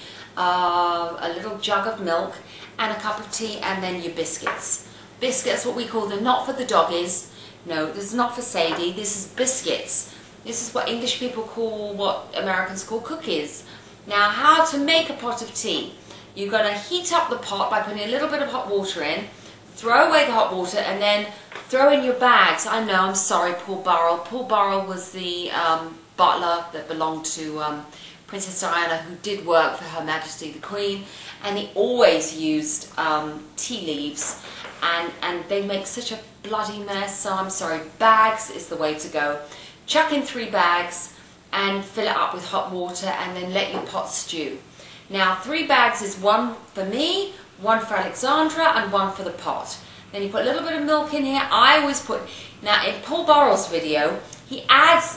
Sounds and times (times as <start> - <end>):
Speech: 0.4 - 55.1.